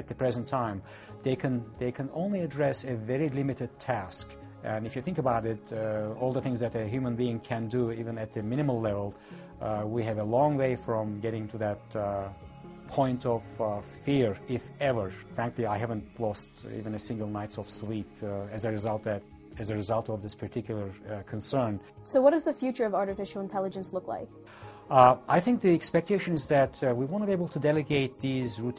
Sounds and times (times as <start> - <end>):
Speech: 0.0 - 12.3, 12.9 - 24.3, 24.9 - 28.7
Music: 0.0 - 28.7.